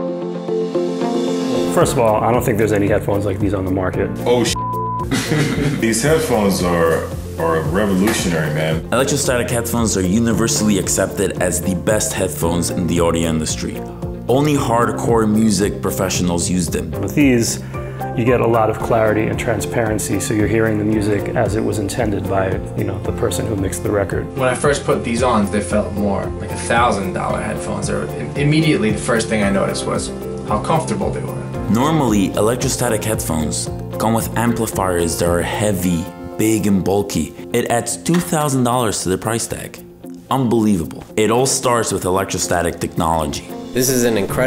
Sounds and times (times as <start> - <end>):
Music: 0.0 - 44.4
Speech: 1.6 - 4.6, 5.8 - 17.6, 18.2 - 44.4.